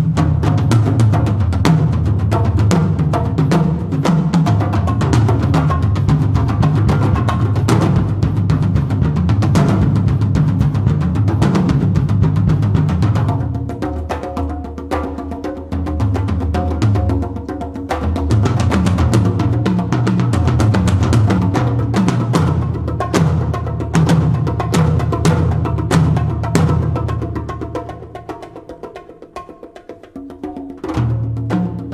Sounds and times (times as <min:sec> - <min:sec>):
Wood block: 0:00.0 - 0:31.9.